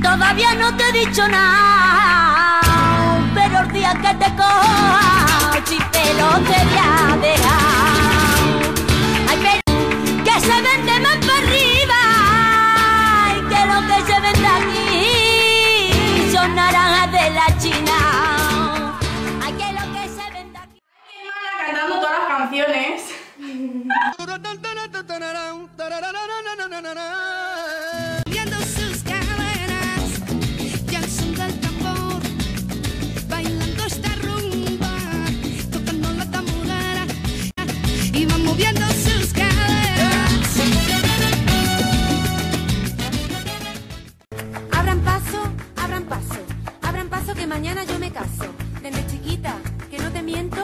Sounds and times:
Flamenco: 0.0 - 20.6, 28.2 - 50.6
Speech: 21.0 - 23.2.

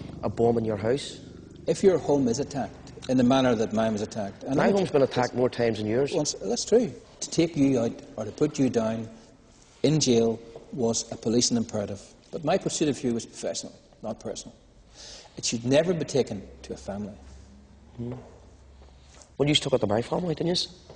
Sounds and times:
Speech: 0.2 - 9.1, 9.8 - 14.6, 15.4 - 17.2, 19.4 - 20.8.

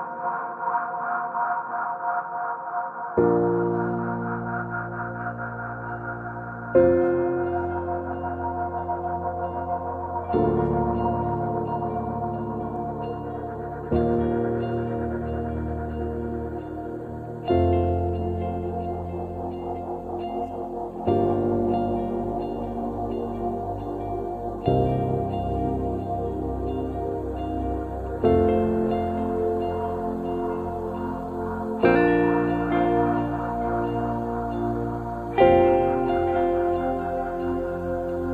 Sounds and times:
Ambient music: 0.0 - 38.3.

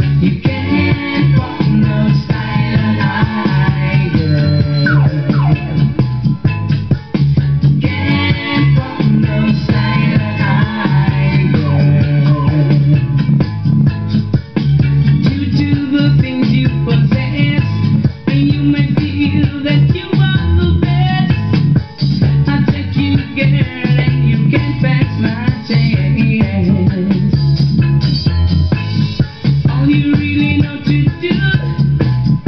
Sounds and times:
Music: 0.0 - 32.4.

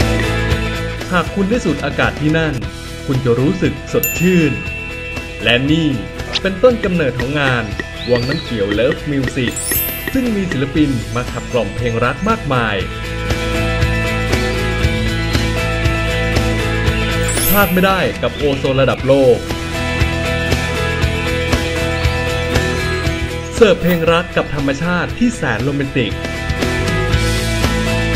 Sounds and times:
Music: 0.0 - 28.1
Speech: 1.1 - 4.6, 5.4 - 12.9, 17.6 - 19.4, 23.6 - 26.2.

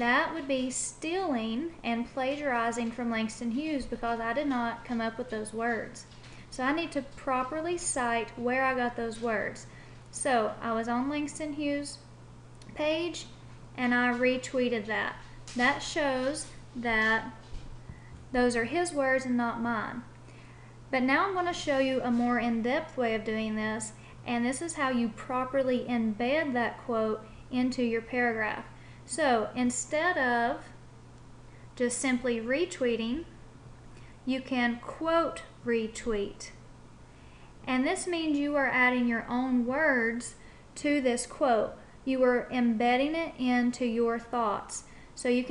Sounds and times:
Speech: 0.0 - 12.1, 12.7 - 17.4, 18.3 - 20.1, 20.9 - 30.8, 31.8 - 33.4, 34.3 - 36.6, 37.7 - 45.5.

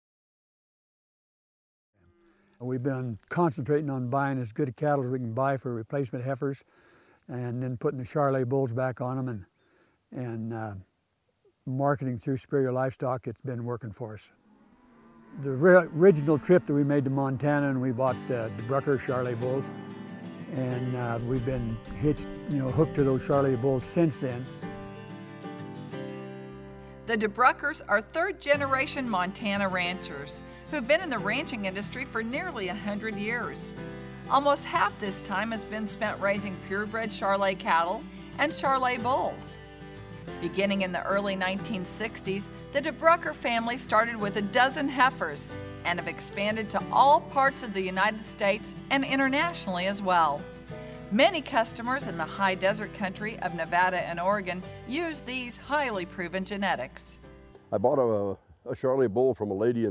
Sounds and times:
Speech: 2.6 - 6.6, 7.3 - 9.5, 11.7 - 14.3, 15.4 - 19.7, 20.5 - 24.4, 57.7 - 59.9.

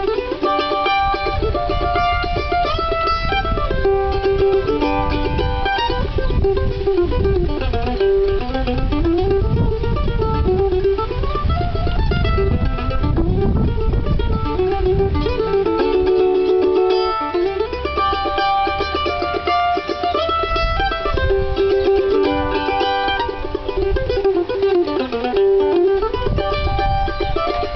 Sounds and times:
Mandolin: 0.0 - 27.7.

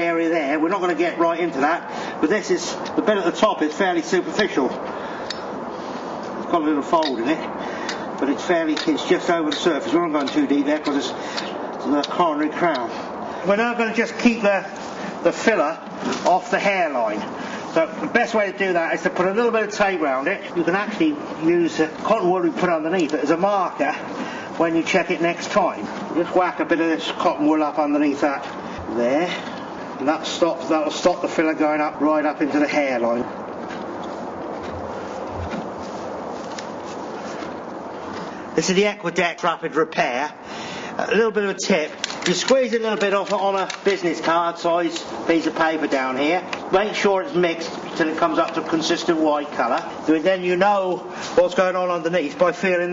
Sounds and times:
Speech: 0.0 - 4.8, 6.5 - 7.6, 8.2 - 11.2, 11.8 - 33.3, 38.6 - 40.4, 41.0 - 52.9.

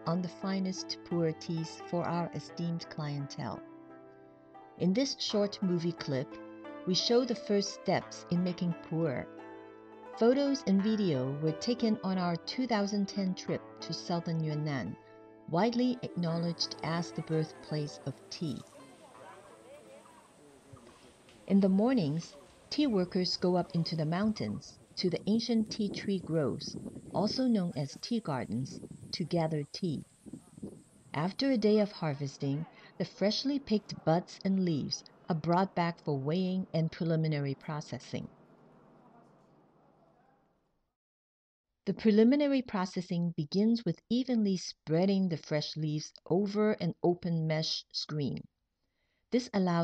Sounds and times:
Speech: 0.0 - 3.6, 4.8 - 6.3, 6.9 - 9.2, 10.2 - 20.1, 20.7 - 30.0, 31.2 - 38.3, 41.9 - 48.5, 49.4 - 49.8
Outside, rural or natural: 18.6 - 32.6.

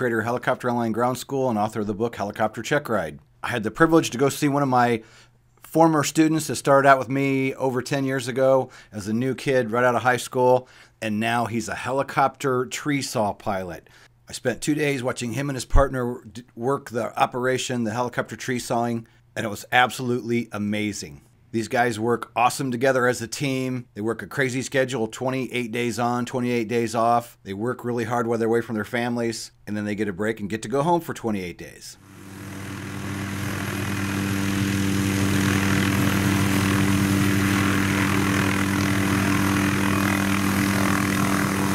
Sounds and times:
Speech: 0.0 - 5.0, 5.7 - 32.0.

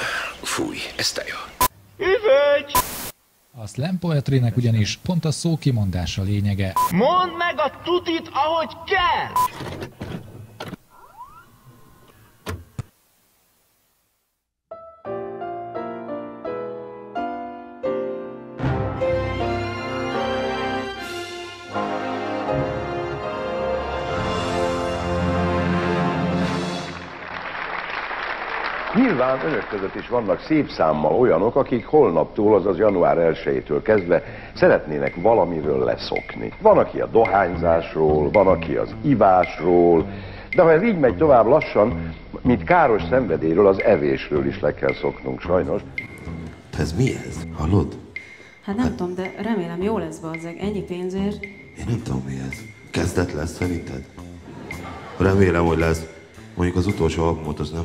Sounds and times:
Speech: 3.6 - 9.4, 29.0 - 40.0, 40.6 - 45.8, 48.7 - 54.1, 55.2 - 57.8
Music: 14.7 - 27.4, 31.2 - 57.8.

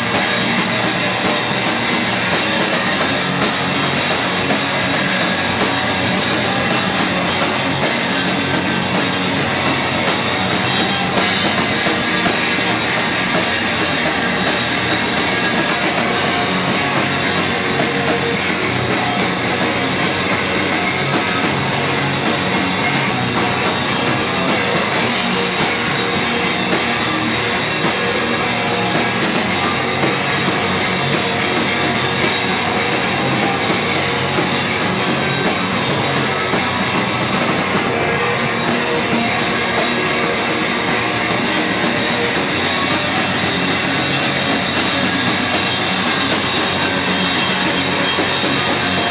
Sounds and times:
Guitar: 0.0 - 49.1
Rock music: 0.0 - 49.1.

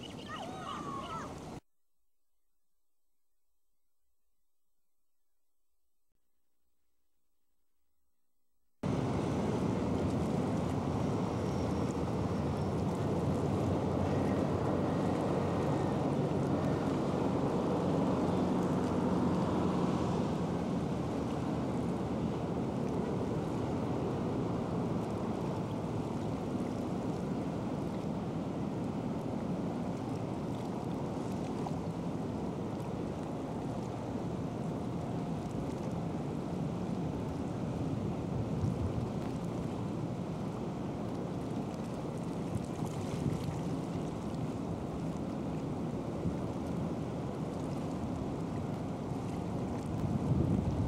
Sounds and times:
Ship: 0.0 - 1.7, 3.0 - 50.8.

